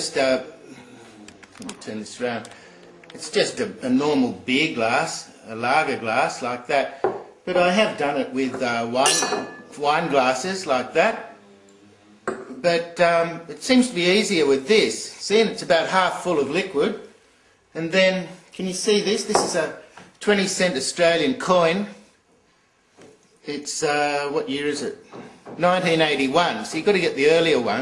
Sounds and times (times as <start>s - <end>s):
Speech: 0.0s - 2.5s, 3.1s - 11.3s, 12.6s - 17.1s, 17.8s - 22.0s, 23.4s - 25.0s, 25.6s - 27.8s
Glass: 9.0s - 9.8s.